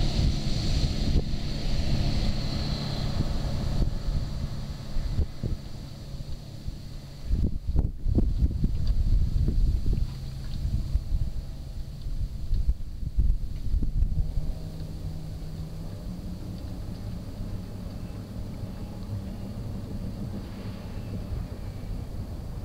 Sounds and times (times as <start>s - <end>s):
Motorboat, speedboat: 0.0s - 22.6s.